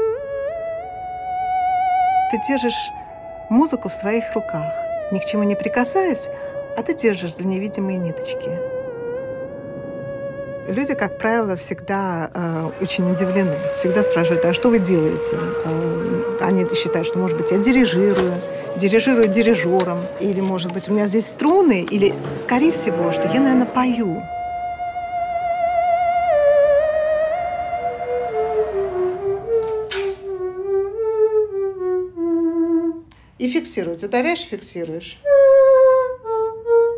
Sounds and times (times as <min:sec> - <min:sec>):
Music: 0:00.0 - 0:36.9
Speech: 0:02.3 - 0:08.6, 0:10.7 - 0:24.3, 0:33.4 - 0:35.2.